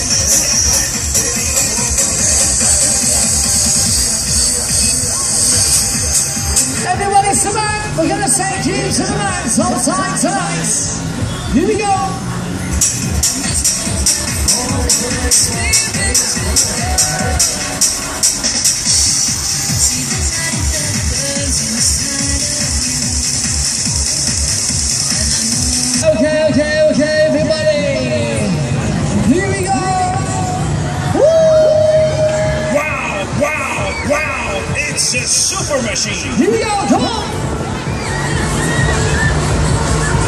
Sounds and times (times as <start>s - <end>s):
Music: 0.0s - 40.2s.